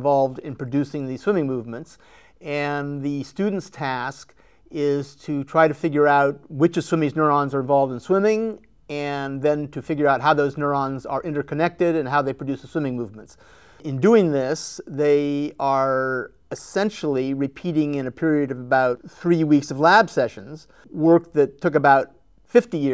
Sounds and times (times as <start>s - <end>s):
Speech: 0.0s - 22.9s.